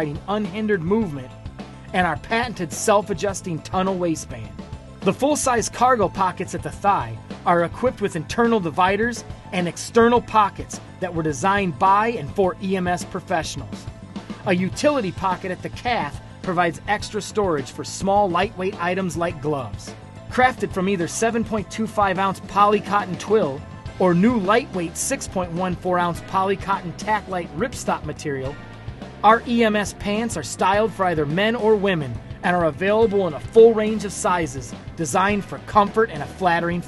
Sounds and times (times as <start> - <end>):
Speech: 0.0 - 1.3, 1.9 - 28.6, 29.2 - 36.8
Music: 0.0 - 36.8.